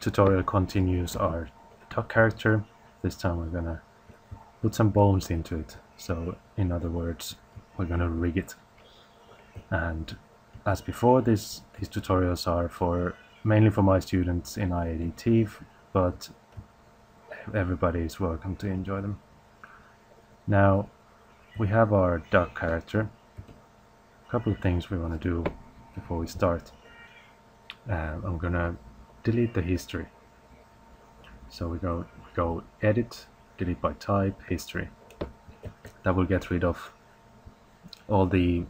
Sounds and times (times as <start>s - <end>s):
Speech: 0.0s - 3.8s, 4.6s - 8.6s, 9.7s - 16.4s, 17.4s - 19.2s, 20.5s - 20.9s, 21.6s - 23.2s, 24.3s - 26.8s, 27.7s - 30.2s, 31.5s - 35.0s, 36.0s - 37.0s, 38.0s - 38.7s.